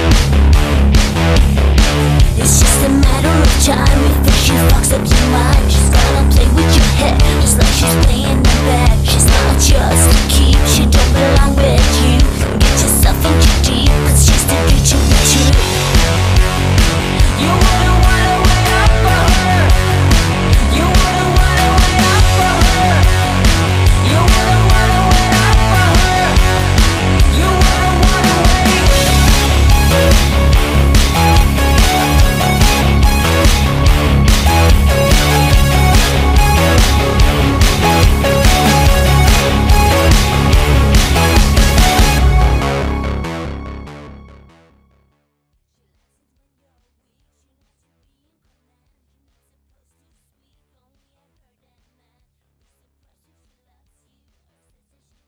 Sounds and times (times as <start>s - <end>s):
Techno: 0.0s - 44.3s.